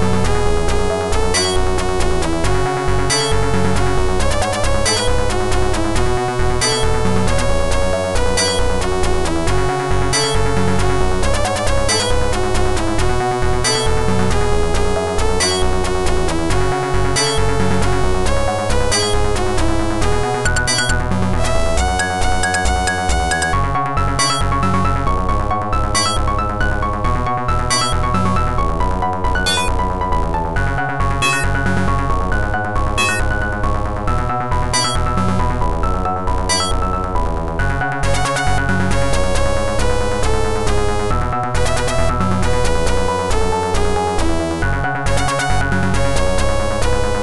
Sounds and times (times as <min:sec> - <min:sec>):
Music: 0:00.0 - 0:47.2.